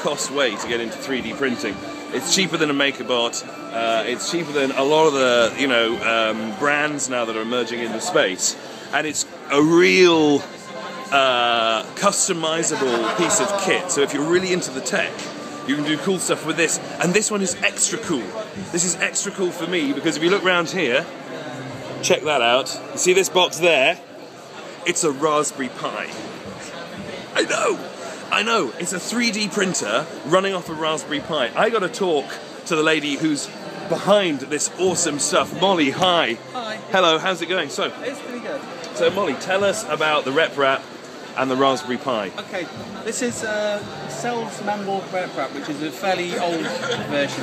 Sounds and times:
Speech: 0.0 - 21.1
Music: 0.0 - 40.8, 41.4 - 47.4.

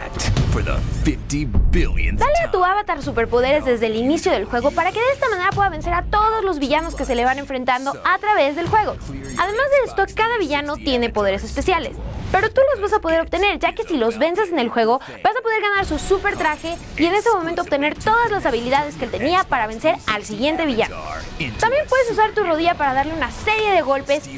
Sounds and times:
Speech: 0.0 - 24.3.

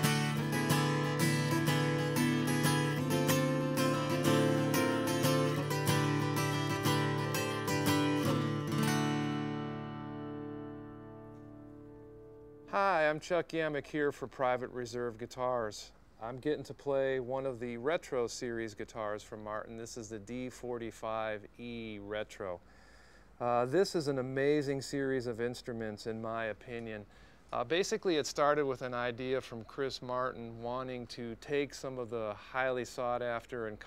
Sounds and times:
Strum: 0.0 - 12.7.

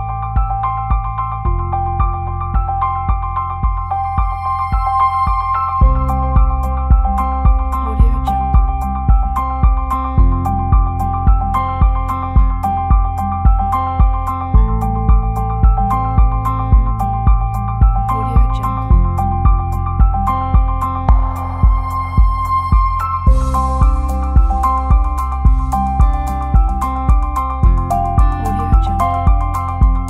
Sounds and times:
Background music: 0.0 - 30.1.

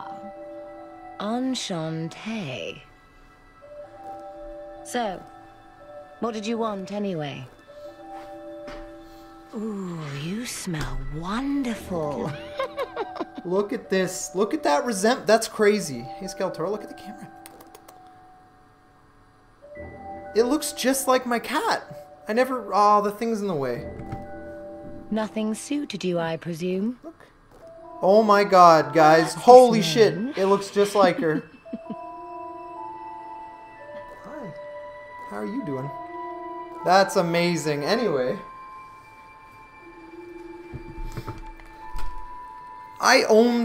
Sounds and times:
Music: 0.0 - 43.6.

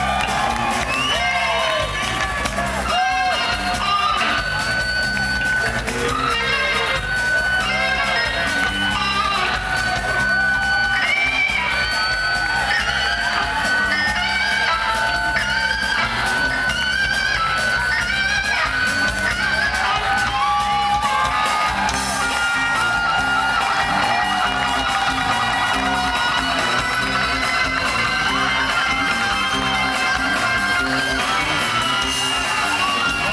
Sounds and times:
Electric guitar: 0.0 - 33.3.

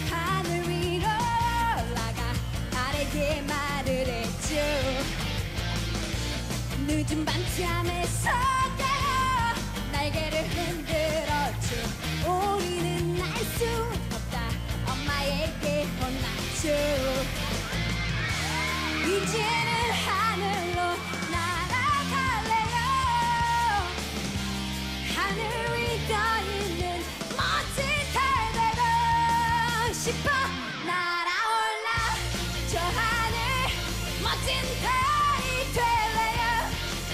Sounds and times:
Background music: 0.0 - 37.1
Pop music: 0.0 - 37.1.

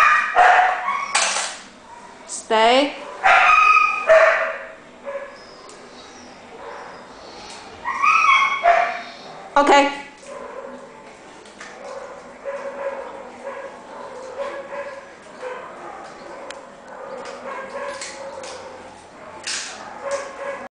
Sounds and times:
Bow-wow: 0.0 - 1.2, 3.1 - 5.4, 11.7 - 20.7.

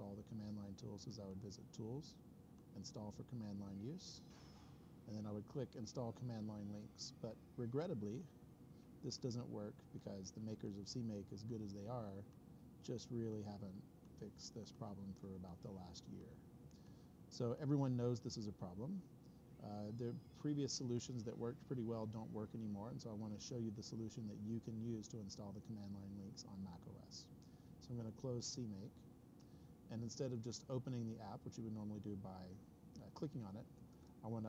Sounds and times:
Speech: 0.0 - 4.3, 5.1 - 8.4, 9.0 - 16.4, 17.3 - 29.0, 29.9 - 34.4.

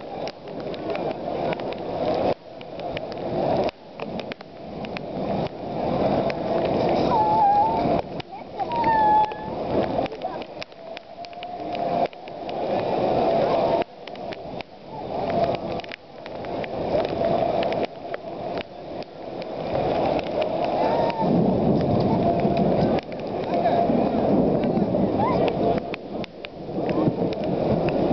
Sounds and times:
Rain on surface: 0.0 - 28.1
Speech: 7.8 - 10.6, 21.9 - 25.8.

